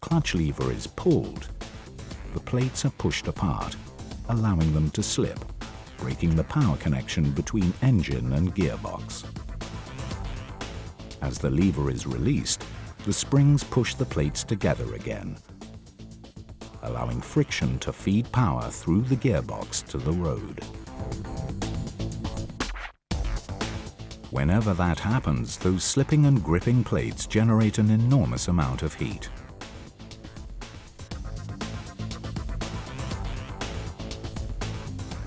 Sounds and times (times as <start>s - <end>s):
Speech: 0.0s - 1.5s, 2.4s - 5.4s, 6.0s - 9.3s, 11.2s - 15.4s, 16.8s - 20.7s, 24.3s - 29.4s
Music: 0.0s - 35.2s.